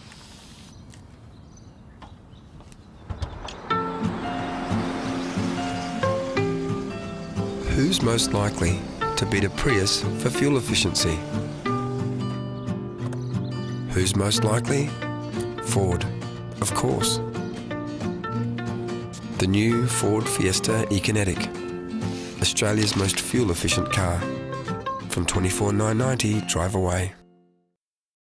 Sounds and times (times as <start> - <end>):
Music: 3.4 - 27.7
Speech: 7.6 - 11.2, 13.9 - 14.9, 15.6 - 17.2, 19.3 - 21.5, 22.4 - 24.3, 25.1 - 27.2.